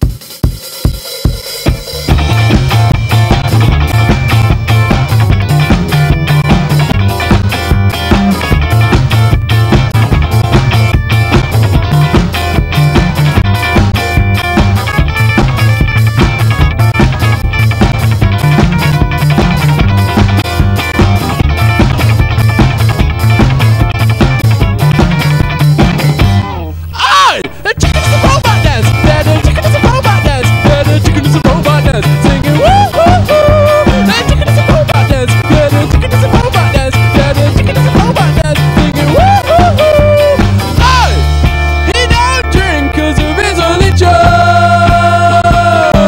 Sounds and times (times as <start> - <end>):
Music: 0.0 - 26.9, 27.5 - 46.0.